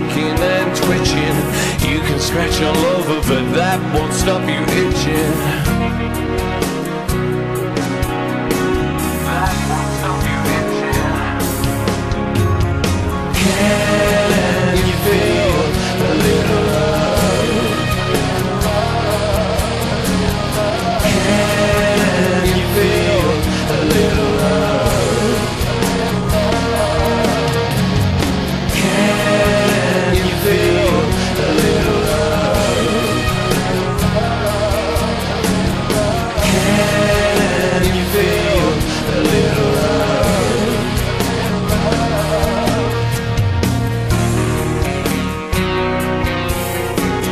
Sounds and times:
Heavy metal: 0.0s - 47.3s.

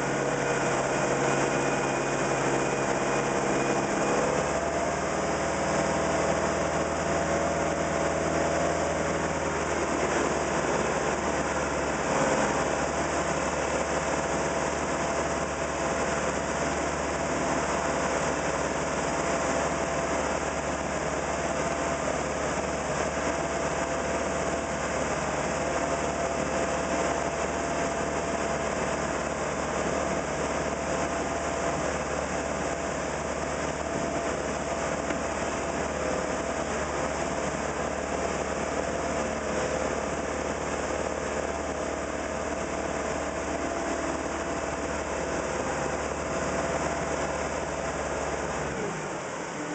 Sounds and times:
Motorboat, speedboat: 0.0s - 49.7s.

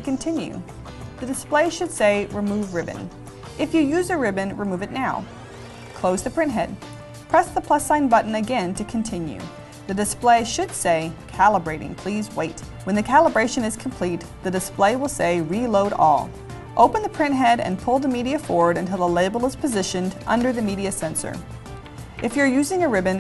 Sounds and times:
Speech: 0.0s - 5.2s, 6.0s - 6.8s, 7.4s - 21.4s, 22.2s - 23.2s
Music: 0.0s - 23.2s.

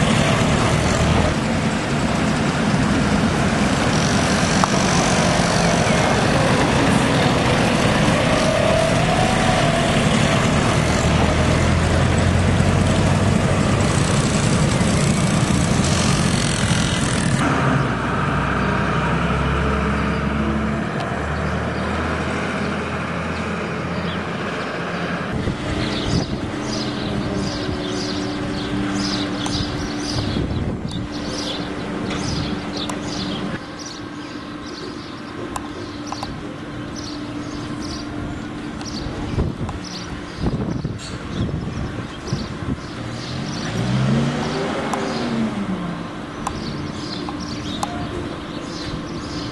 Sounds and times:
Truck: 0.0s - 49.5s.

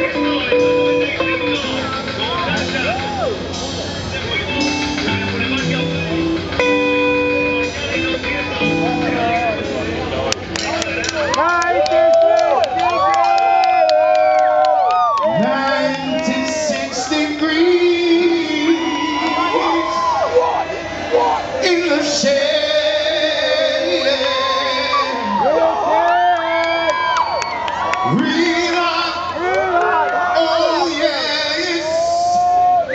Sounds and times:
Music: 0.0s - 26.4s, 27.1s - 29.6s.

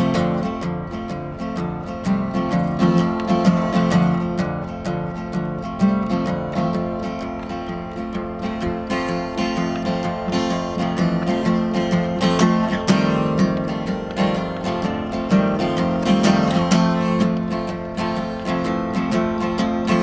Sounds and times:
Music: 0.0s - 20.0s.

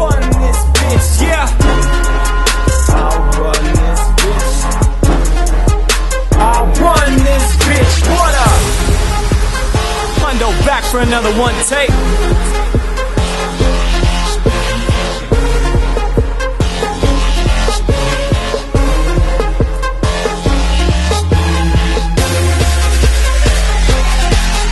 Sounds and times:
Music: 0.0s - 24.7s
Speech: 10.2s - 12.0s.

